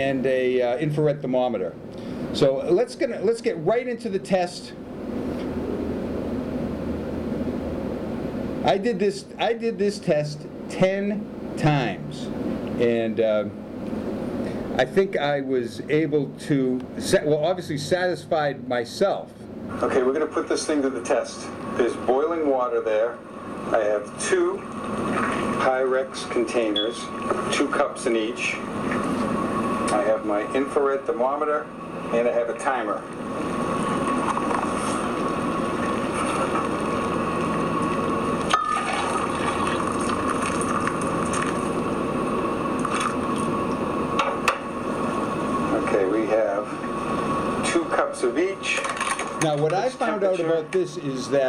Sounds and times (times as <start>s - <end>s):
Speech: 0.0s - 1.8s, 2.4s - 4.8s, 8.6s - 13.6s, 14.8s - 24.6s, 25.6s - 28.6s, 29.9s - 33.1s, 45.7s - 46.8s, 47.6s - 51.4s.